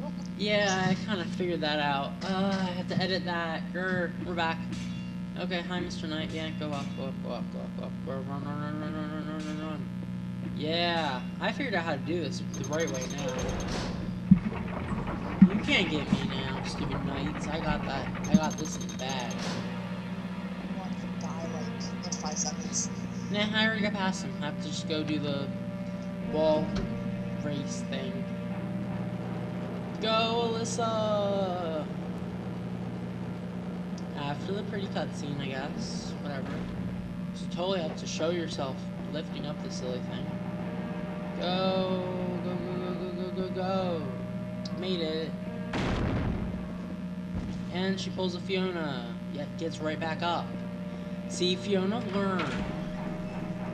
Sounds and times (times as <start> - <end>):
Speech: 0.0 - 4.7, 5.4 - 9.9, 10.5 - 13.6, 15.3 - 19.5, 20.6 - 25.6, 26.2 - 28.3, 30.0 - 32.0, 34.0 - 36.7, 37.4 - 40.3, 41.4 - 45.5, 47.7 - 50.6, 51.3 - 52.8.